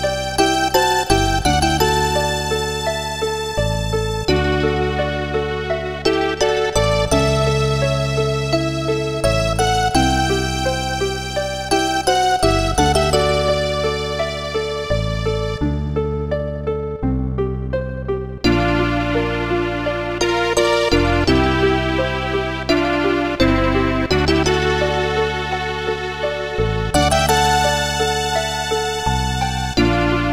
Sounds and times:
Music: 0.0 - 30.3.

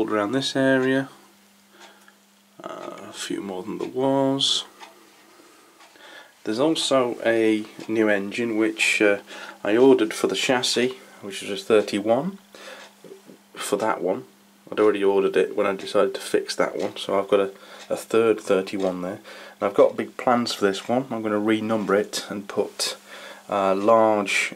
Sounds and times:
Speech: 0.0 - 1.2, 2.6 - 4.8, 6.4 - 12.4, 13.1 - 24.5.

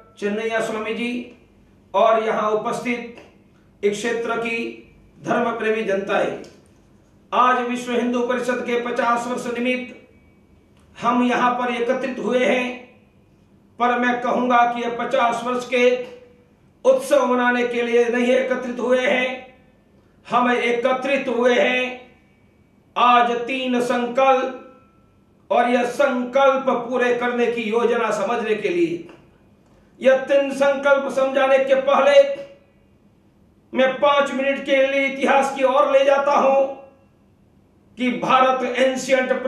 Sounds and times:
Male speech, man speaking: 0.0 - 1.3, 2.0 - 6.5, 7.4 - 10.0, 11.0 - 12.9, 13.8 - 16.3, 16.9 - 19.6, 20.3 - 22.1, 23.0 - 24.7, 25.5 - 29.2, 30.0 - 32.6, 33.8 - 36.9, 38.0 - 39.4
Narration, monologue: 0.0 - 39.4.

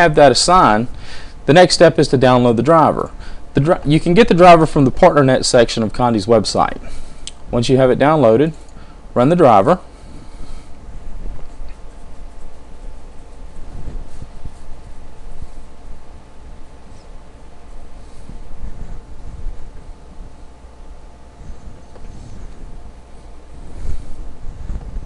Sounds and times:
Speech: 0.0 - 0.9, 1.5 - 6.8, 7.5 - 8.6, 9.2 - 9.9.

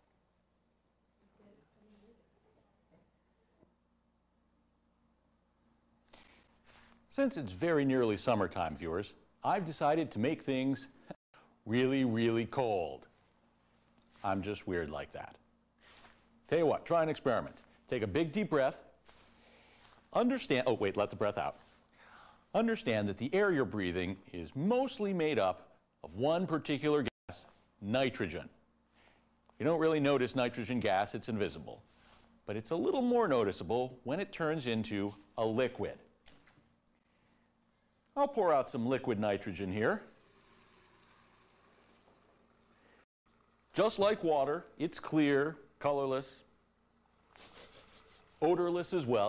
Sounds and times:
Speech: 7.1 - 11.0, 11.7 - 13.1, 14.2 - 15.4, 16.5 - 18.9, 20.1 - 21.6, 22.5 - 28.6, 29.6 - 31.8, 32.5 - 36.1, 38.2 - 40.1, 43.8 - 46.5, 48.4 - 49.2.

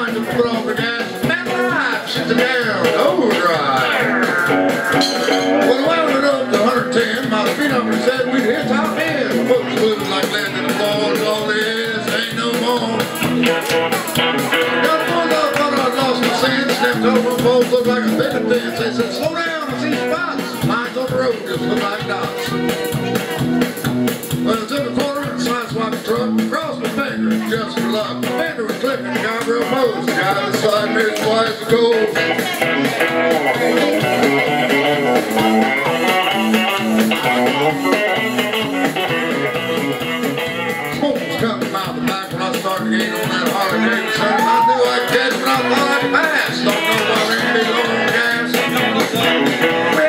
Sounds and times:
Male singing: 0.0 - 4.0, 5.6 - 13.1, 14.8 - 22.5, 24.5 - 32.2, 41.1 - 50.0
Music: 0.0 - 50.0.

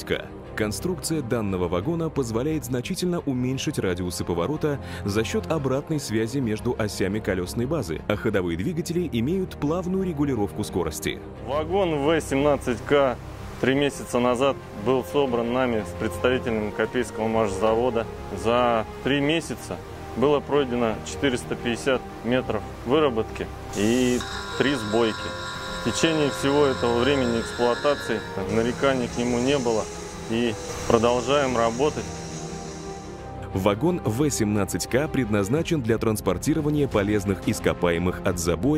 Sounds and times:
Speech: 0.0 - 25.3, 25.9 - 32.1, 33.5 - 38.7
Music: 0.0 - 38.7.

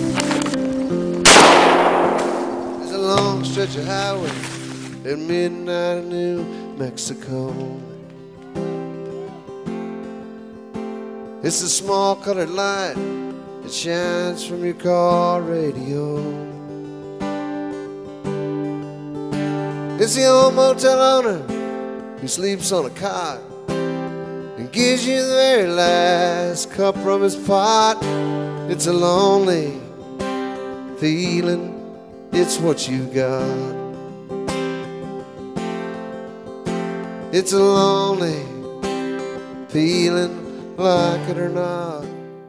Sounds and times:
Music: 0.0 - 1.4, 2.8 - 42.4.

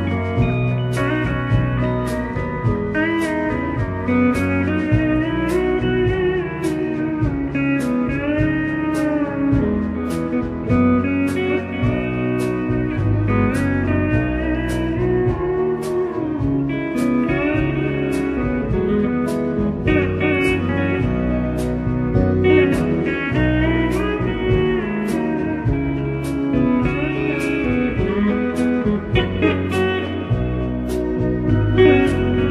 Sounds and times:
Acoustic guitar: 0.0 - 32.5
Electric guitar: 0.0 - 32.5
Strum: 0.0 - 32.5.

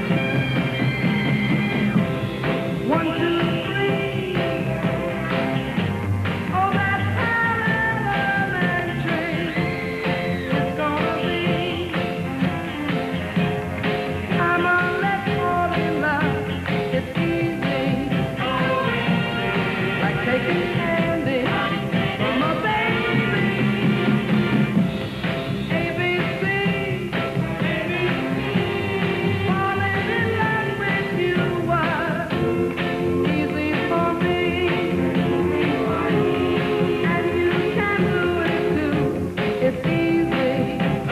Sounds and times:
Music: 0.0 - 41.1.

